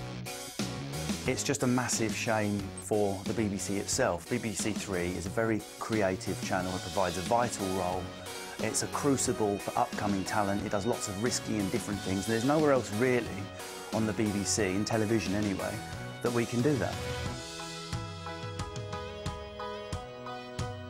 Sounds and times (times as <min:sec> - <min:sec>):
Music: 0:00.0 - 0:20.8
Narration, monologue: 0:00.4 - 0:18.0
Male speech, man speaking: 0:01.3 - 0:17.0.